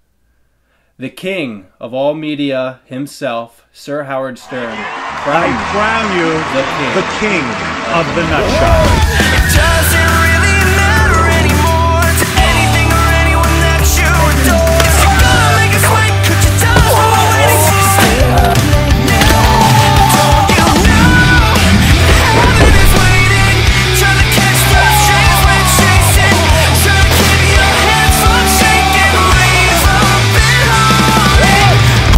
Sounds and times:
Music: 0:04.7 - 0:32.1.

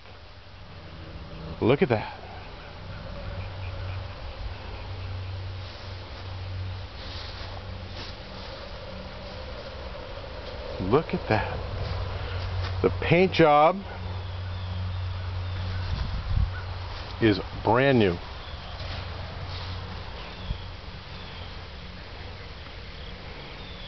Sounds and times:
Speech: 0:01.6 - 0:02.2, 0:10.8 - 0:11.6, 0:12.8 - 0:13.9, 0:17.2 - 0:18.2.

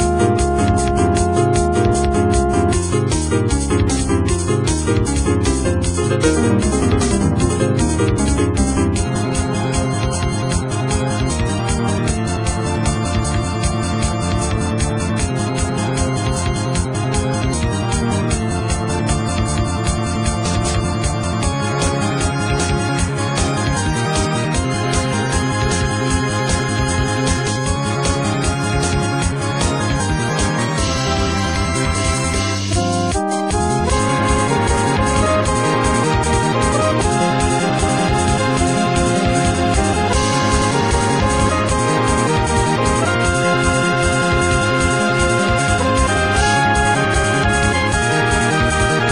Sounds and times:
Music: 0:00.0 - 0:49.1.

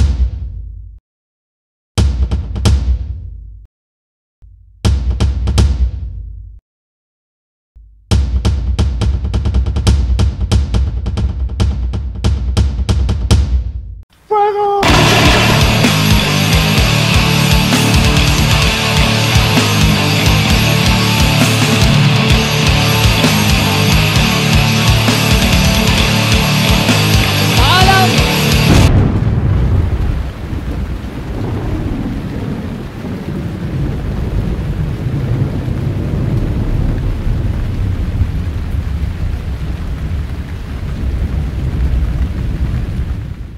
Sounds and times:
Music: 0:08.1 - 0:13.8, 0:14.8 - 0:28.9
Speech: 0:14.3 - 0:15.2, 0:27.6 - 0:28.3.

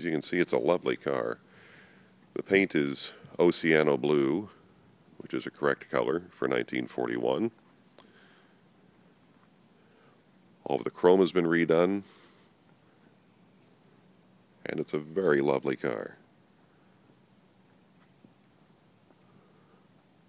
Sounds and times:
Speech: 0:00.0 - 0:01.4, 0:02.4 - 0:04.6, 0:05.2 - 0:07.6, 0:10.6 - 0:12.1, 0:14.6 - 0:16.2.

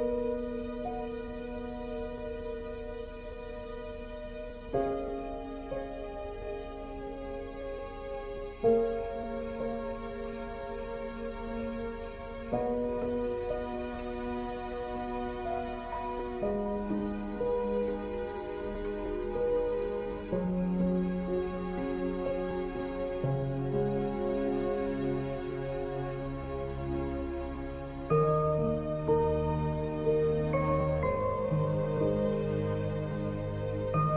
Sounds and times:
Music: 0:00.0 - 0:34.1.

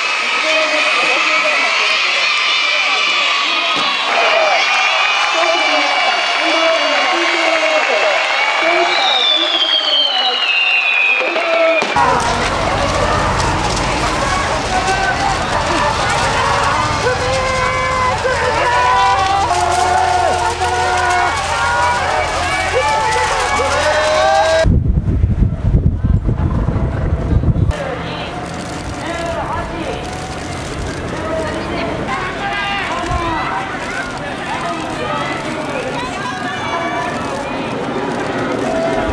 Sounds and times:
Speech: 0:05.3 - 0:10.4.

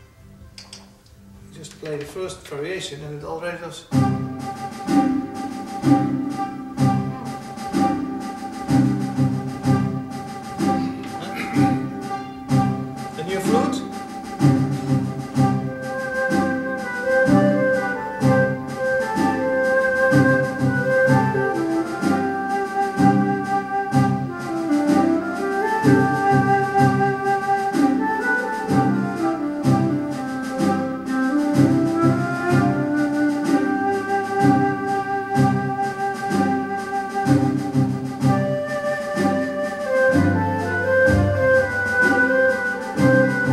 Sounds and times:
Inside, large room or hall: 0:00.0 - 0:43.5
Piano: 0:03.9 - 0:43.5.

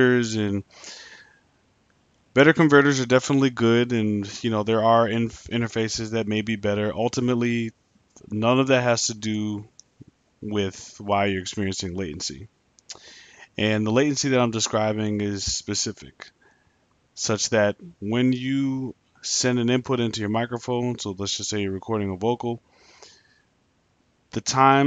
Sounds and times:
Speech: 0:00.0 - 0:01.1, 0:02.4 - 0:09.8, 0:10.4 - 0:16.3, 0:17.2 - 0:22.6, 0:24.4 - 0:24.8.

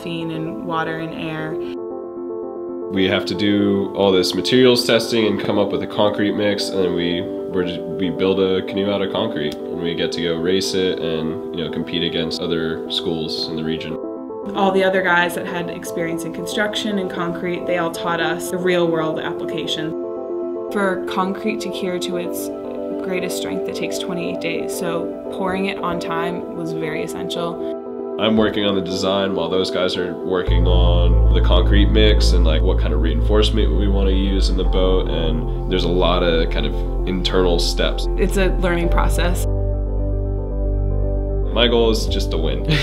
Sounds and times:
Speech: 0:00.0 - 0:01.7, 0:02.9 - 0:19.9, 0:20.7 - 0:27.6, 0:28.2 - 0:39.4, 0:41.5 - 0:42.8
Music: 0:00.0 - 0:42.8.

